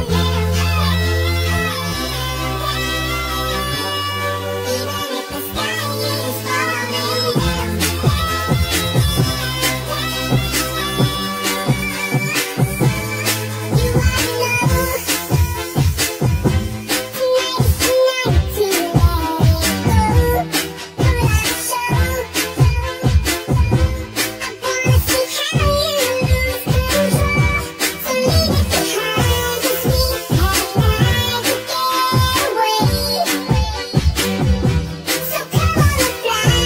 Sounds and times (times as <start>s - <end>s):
Music: 0.0s - 36.6s.